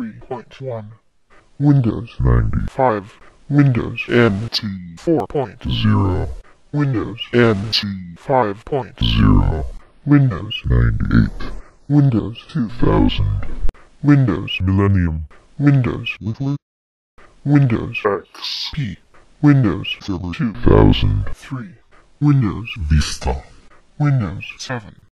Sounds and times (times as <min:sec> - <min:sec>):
Speech synthesizer: 0:00.0 - 0:01.0, 0:01.6 - 0:16.6, 0:17.5 - 0:25.1.